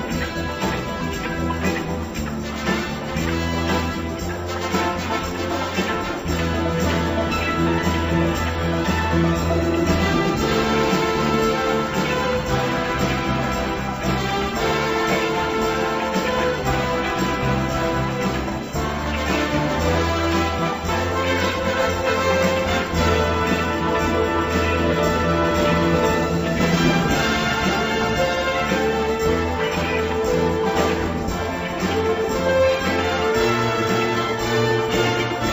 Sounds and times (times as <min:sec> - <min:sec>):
Music: 0:00.0 - 0:35.5.